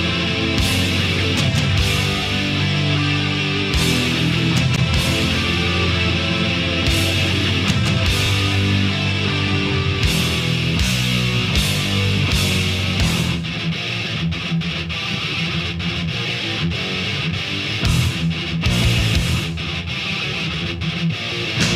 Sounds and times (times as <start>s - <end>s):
Heavy metal: 0.0s - 21.7s.